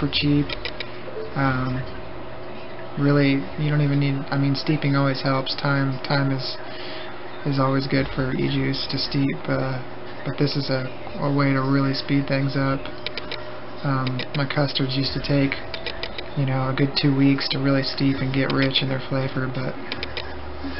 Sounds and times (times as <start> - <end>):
Speech: 0.0 - 0.6, 1.4 - 2.0, 2.7 - 6.7, 7.3 - 13.0, 13.8 - 15.7, 16.4 - 19.9.